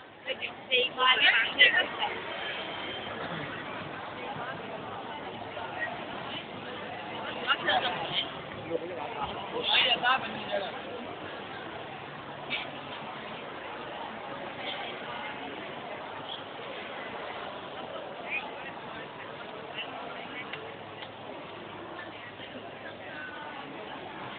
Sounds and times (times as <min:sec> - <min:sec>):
Speech: 0:00.2 - 0:24.3.